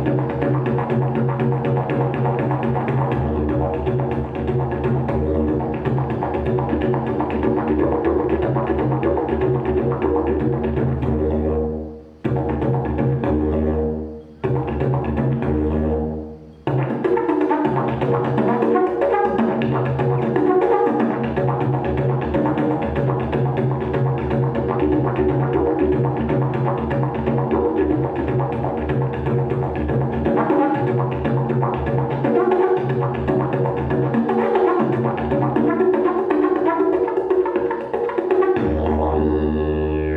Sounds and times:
Didgeridoo: 0.0s - 40.1s.

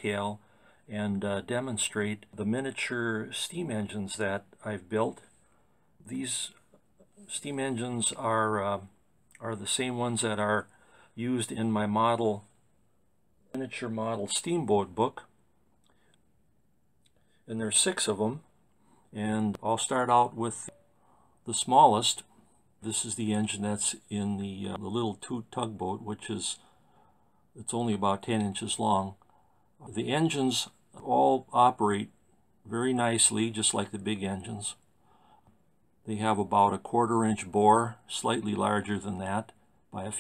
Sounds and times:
Speech: 0.0s - 5.3s, 6.0s - 12.6s, 13.5s - 15.3s, 17.5s - 18.5s, 19.1s - 20.8s, 21.4s - 26.6s, 27.6s - 34.8s, 36.0s - 40.2s.

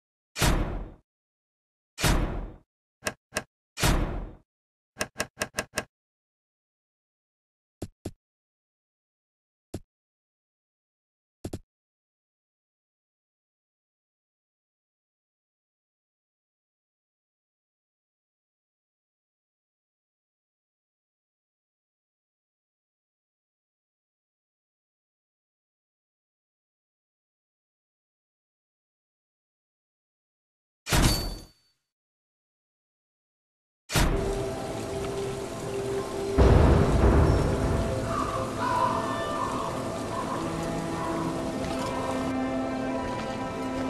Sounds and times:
Sound effect: 0.4s - 1.0s, 2.0s - 4.4s, 30.9s - 31.9s, 33.9s - 34.4s.

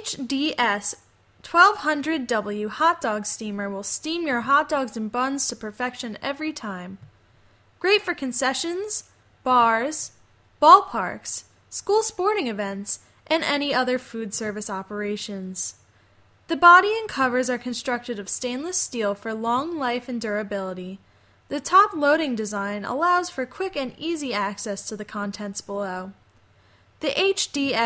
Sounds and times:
Speech: 0.0s - 7.0s, 7.8s - 15.8s, 16.5s - 26.2s, 27.0s - 27.8s.

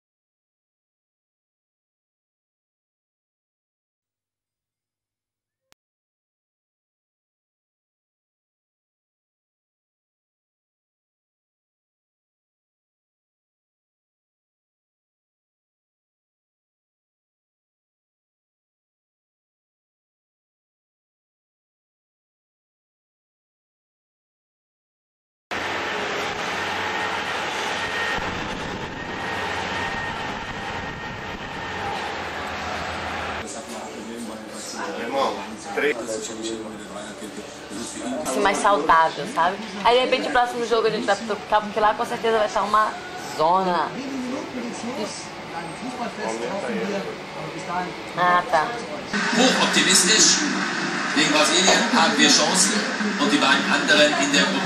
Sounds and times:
Speech: 33.4s - 50.6s, 51.2s - 54.6s.

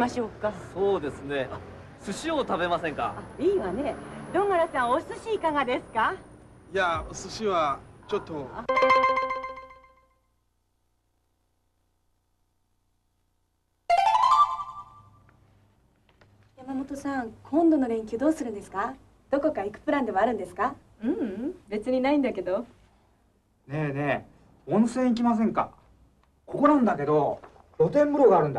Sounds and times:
Music: 8.7s - 10.1s, 13.9s - 15.2s.

